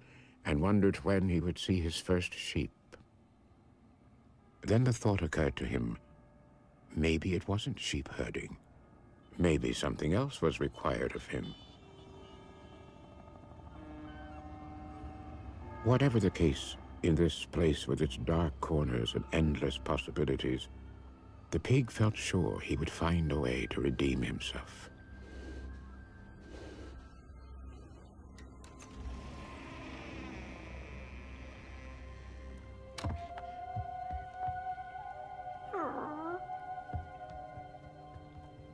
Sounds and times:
Speech: 0:00.4 - 0:02.7, 0:04.6 - 0:06.0, 0:06.9 - 0:08.6, 0:09.4 - 0:11.6, 0:15.8 - 0:20.7, 0:21.5 - 0:24.9
Music: 0:03.5 - 0:38.7.

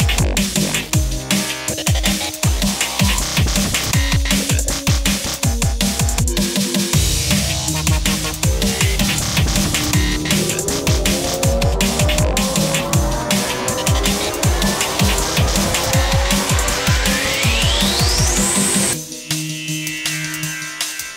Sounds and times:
Dubstep: 0:00.0 - 0:21.1.

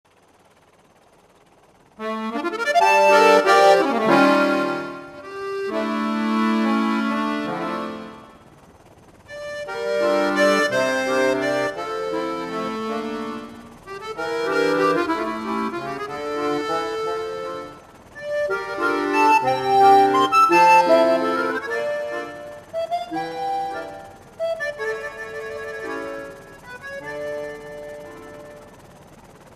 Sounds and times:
Organ: 0:02.0 - 0:08.4, 0:09.3 - 0:28.7.

